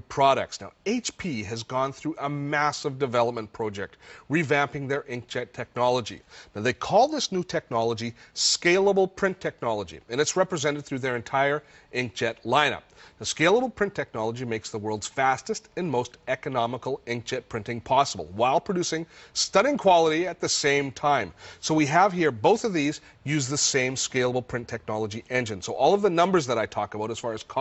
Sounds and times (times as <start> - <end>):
Speech: 0.0 - 27.6.